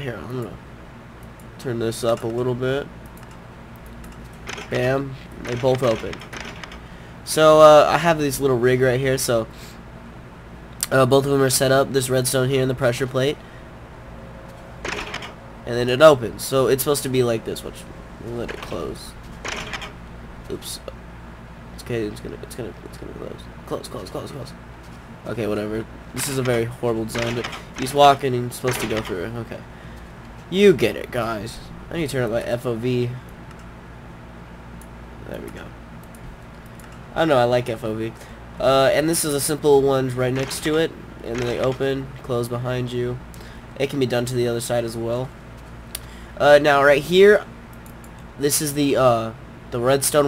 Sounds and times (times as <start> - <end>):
Speech: 0.0 - 0.6, 1.6 - 2.9, 4.7 - 6.2, 7.3 - 9.5, 10.8 - 13.4, 15.7 - 19.2, 20.5 - 21.0, 21.8 - 24.6, 25.3 - 29.7, 30.5 - 33.2, 35.2 - 35.8, 37.2 - 43.2, 43.8 - 45.4, 46.4 - 47.5, 48.4 - 50.2.